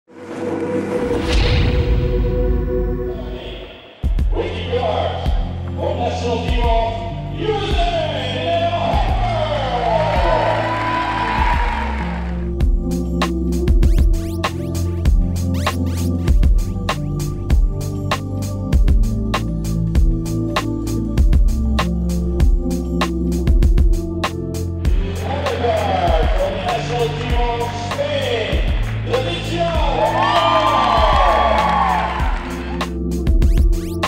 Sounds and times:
Music: 0.1 - 34.0
Speech: 4.3 - 9.8, 25.2 - 30.4.

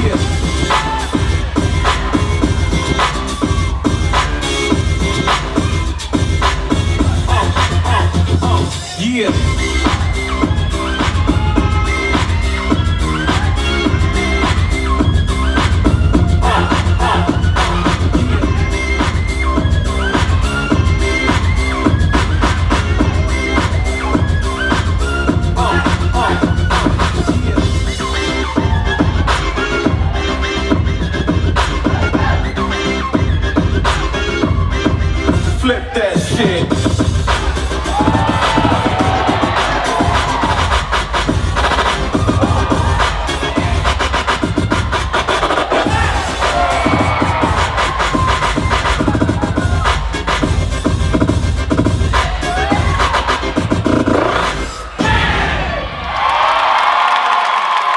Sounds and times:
Inside, large room or hall: 0.0 - 57.9
Music: 0.0 - 57.9.

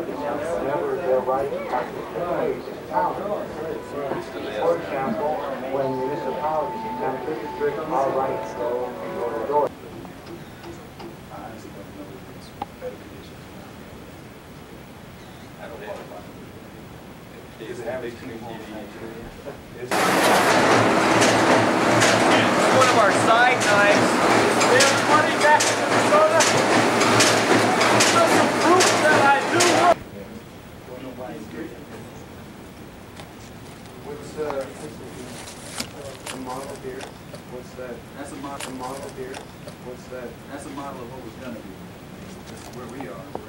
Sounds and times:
Speech: 0.0 - 9.7, 11.3 - 14.1, 15.6 - 16.4, 17.4 - 20.2, 22.2 - 26.9, 27.8 - 32.4, 34.0 - 41.8, 42.4 - 43.4.

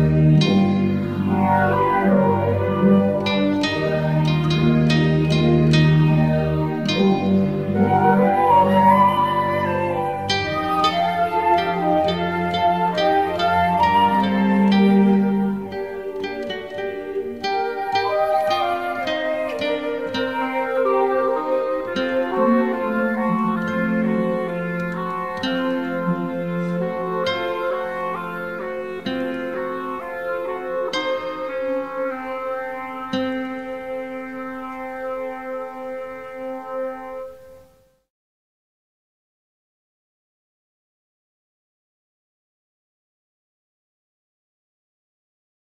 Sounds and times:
Pizzicato: 0.0 - 37.8.

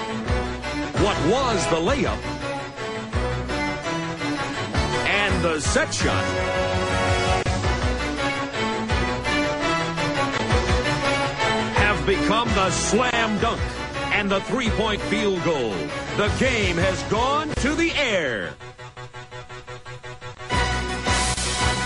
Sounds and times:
Music: 0.0 - 21.8
Speech: 1.0 - 2.2, 5.0 - 6.3, 11.8 - 18.6.

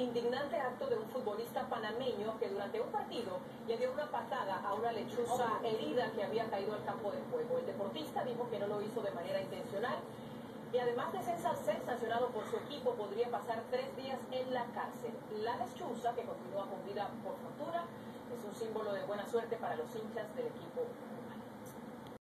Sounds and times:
Speech: 0.0 - 10.1, 10.8 - 21.5.

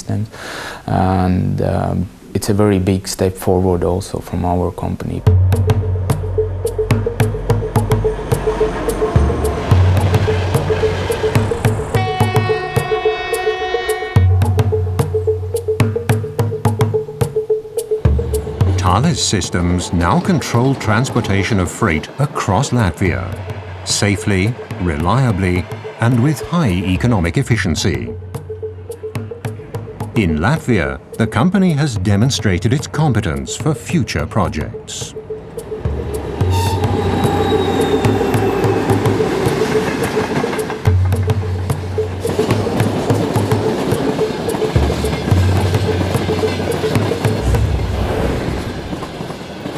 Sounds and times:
Train: 7.6 - 14.1, 19.8 - 27.0, 35.3 - 49.7.

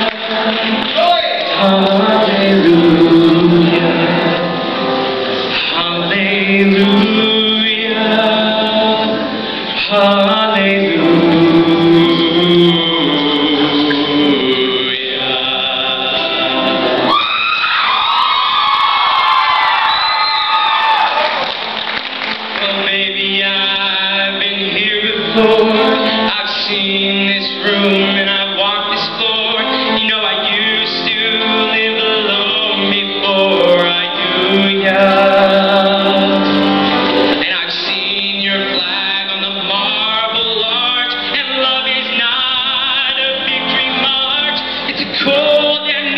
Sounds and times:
Male singing: 0.0 - 4.5, 5.5 - 16.8, 22.6 - 36.7, 37.3 - 46.1
Music: 0.0 - 46.1.

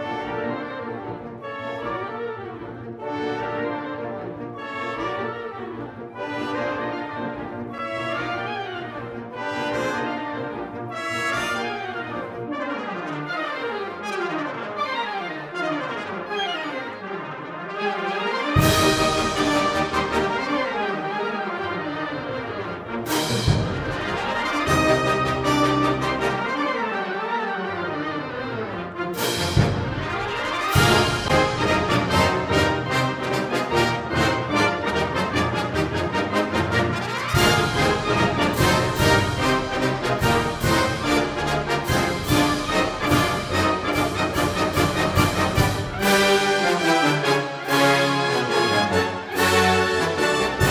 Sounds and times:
Music: 0.0 - 50.7.

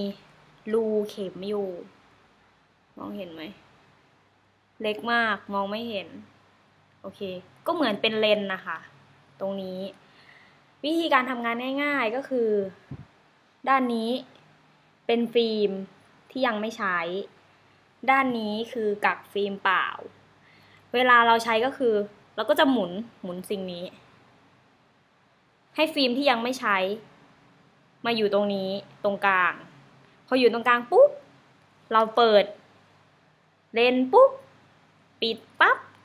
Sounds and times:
Speech: 0.0 - 2.0, 3.0 - 3.6, 4.8 - 6.3, 7.0 - 10.0, 10.8 - 13.0, 13.6 - 14.4, 15.1 - 17.4, 18.0 - 20.2, 20.9 - 24.1, 25.8 - 27.1, 28.0 - 31.3, 31.9 - 32.6, 33.7 - 34.5, 35.2 - 36.0.

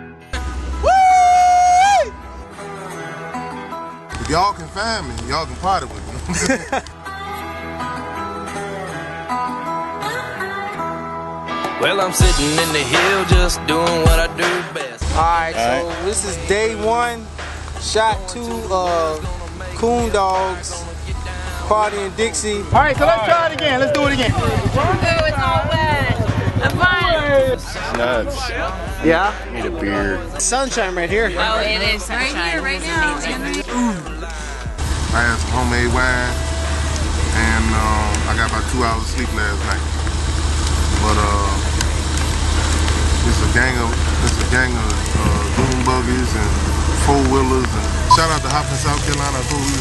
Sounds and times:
Music: 0.0 - 49.8
Speech: 4.2 - 6.5, 11.8 - 34.2, 35.2 - 36.4, 37.3 - 39.8, 41.0 - 41.7, 43.2 - 49.8.

